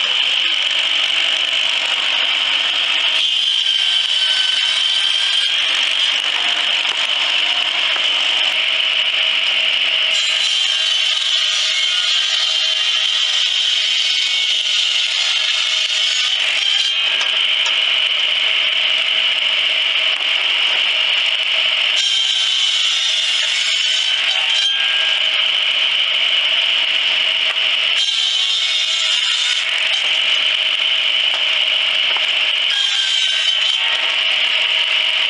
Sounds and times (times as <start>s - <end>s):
Wood: 0.0s - 8.7s, 10.1s - 18.1s, 20.0s - 21.3s, 22.0s - 26.1s, 26.7s - 35.2s
Sawing: 0.0s - 35.2s.